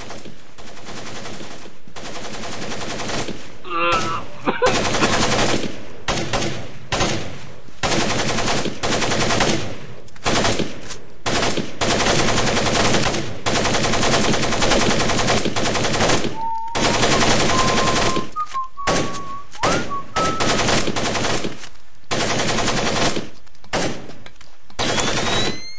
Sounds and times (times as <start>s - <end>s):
Machine gun: 0.0s - 3.5s, 4.6s - 24.1s, 24.8s - 25.7s.